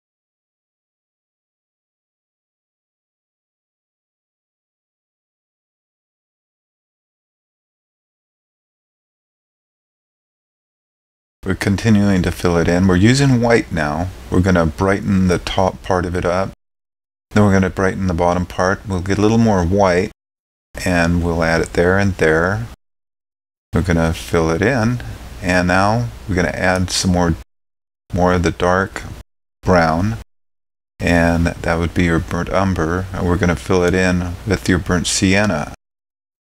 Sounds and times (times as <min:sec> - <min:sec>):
Speech: 0:11.4 - 0:16.6, 0:17.3 - 0:20.2, 0:20.8 - 0:22.8, 0:23.8 - 0:27.4, 0:28.1 - 0:30.2, 0:31.0 - 0:35.8.